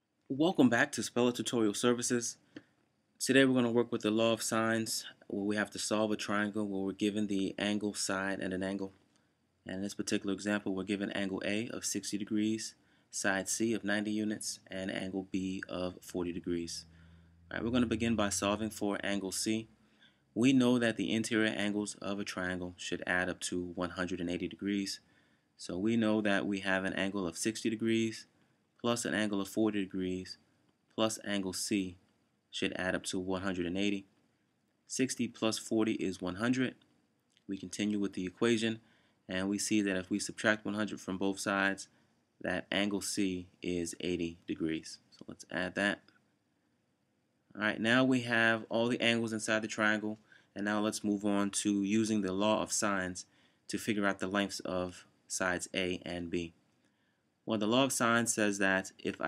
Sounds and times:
Speech: 0:00.3 - 0:02.4, 0:03.2 - 0:09.0, 0:09.7 - 0:16.9, 0:17.5 - 0:19.7, 0:20.4 - 0:25.0, 0:25.6 - 0:30.4, 0:31.0 - 0:34.1, 0:34.9 - 0:36.8, 0:37.5 - 0:46.0, 0:47.6 - 0:56.6, 0:57.5 - 0:59.2.

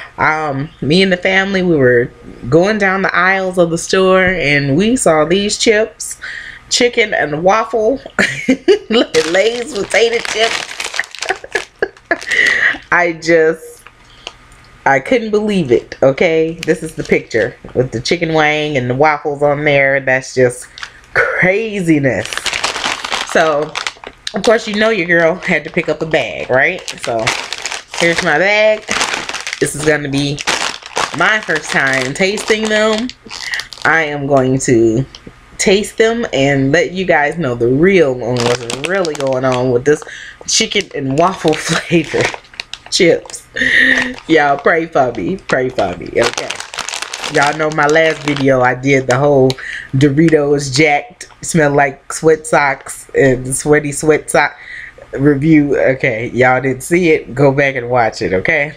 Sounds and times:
Speech: 0:00.0 - 0:10.6, 0:12.2 - 0:13.9, 0:14.9 - 0:22.5, 0:23.3 - 0:27.3, 0:28.0 - 0:29.0, 0:29.6 - 0:30.4, 0:31.1 - 0:46.6, 0:47.3 - 0:58.7.

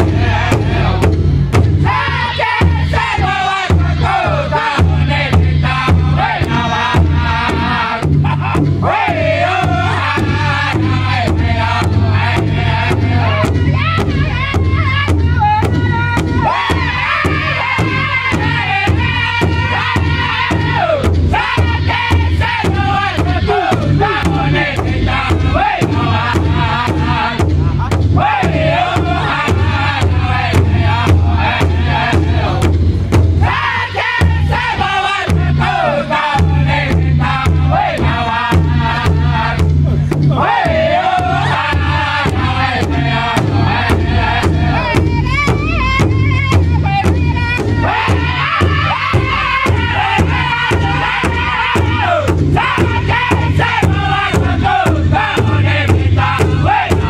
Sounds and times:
Music: 0:00.0 - 0:57.0.

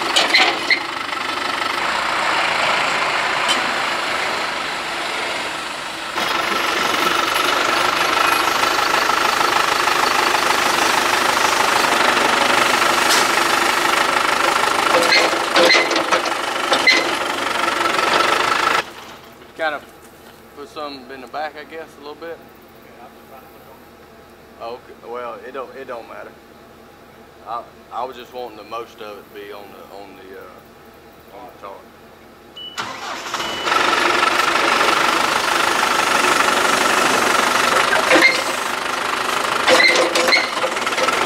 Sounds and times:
Outside, rural or natural: 0:00.0 - 0:28.0, 0:30.6 - 0:41.2.

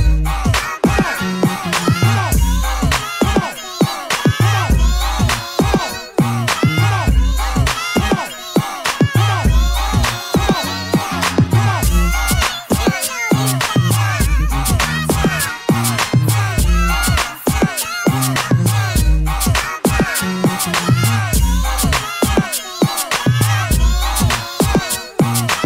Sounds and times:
Hip hop music: 0:00.0 - 0:25.6.

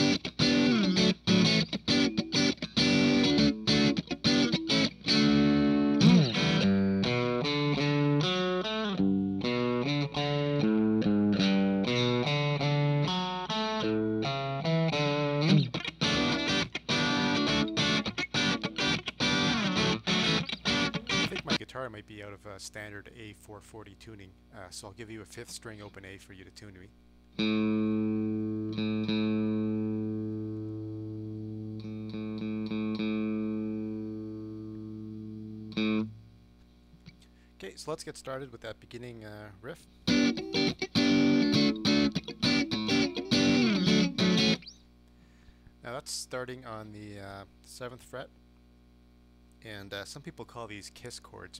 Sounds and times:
Electric guitar: 0:00.0 - 0:21.6, 0:27.3 - 0:36.4, 0:40.0 - 0:45.6.

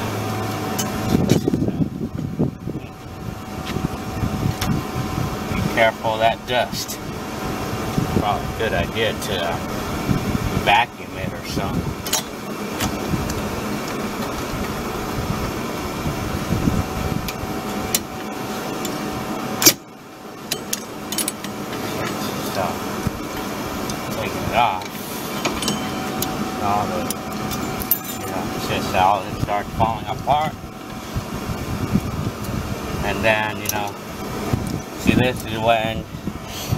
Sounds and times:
Air conditioning: 0:00.0 - 0:36.7
Speech: 0:05.6 - 0:07.0, 0:08.2 - 0:09.6, 0:10.6 - 0:11.8, 0:22.0 - 0:22.8, 0:24.1 - 0:24.9, 0:26.6 - 0:27.1, 0:28.2 - 0:30.6, 0:33.0 - 0:34.0, 0:35.0 - 0:36.1.

